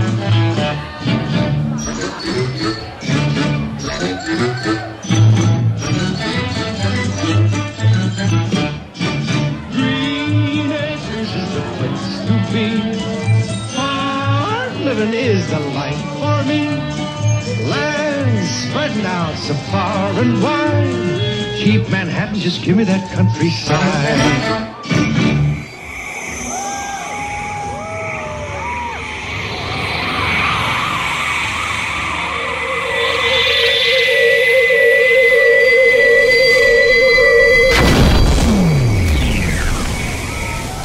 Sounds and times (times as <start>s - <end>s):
Music of Latin America: 0.0s - 30.1s
Singing: 9.6s - 25.1s.